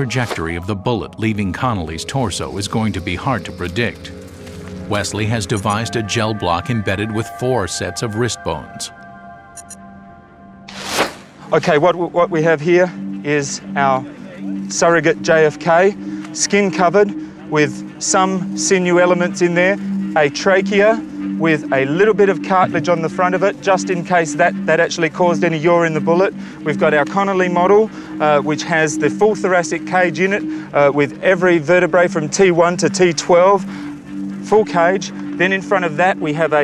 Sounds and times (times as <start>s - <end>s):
Speech: 0.0s - 4.1s, 4.9s - 8.9s, 11.5s - 33.6s, 34.5s - 36.6s
Music: 0.0s - 36.6s
Outside, rural or natural: 0.0s - 36.6s.